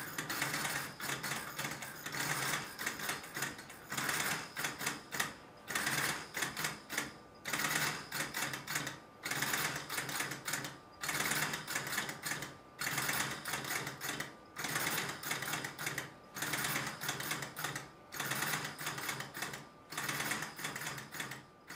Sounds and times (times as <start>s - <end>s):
Inside, small room: 0.0s - 21.7s.